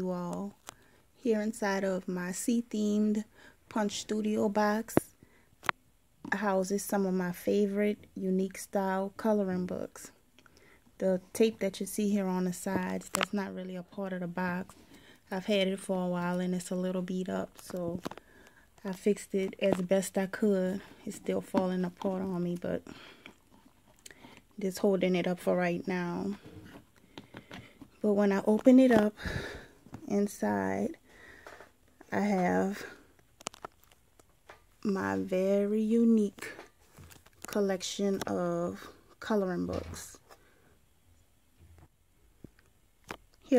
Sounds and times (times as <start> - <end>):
Speech: 1.2 - 5.1, 6.3 - 10.2, 11.0 - 14.7, 15.3 - 18.0, 18.8 - 22.8, 24.6 - 26.4, 28.0 - 29.2, 30.1 - 31.0, 32.1 - 32.9, 34.8 - 36.7, 37.5 - 40.2.